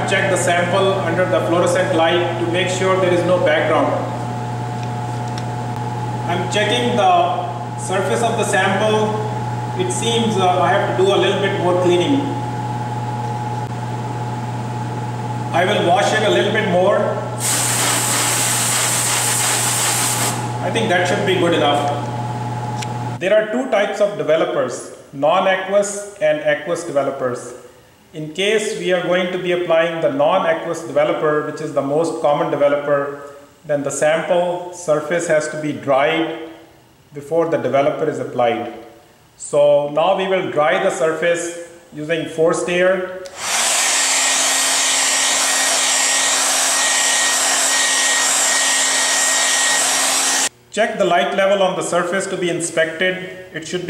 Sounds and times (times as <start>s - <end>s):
Speech: 0.0s - 4.1s, 6.3s - 12.4s, 15.5s - 17.3s, 20.6s - 22.1s, 23.2s - 43.2s, 50.7s - 53.9s
Spray: 17.4s - 20.4s.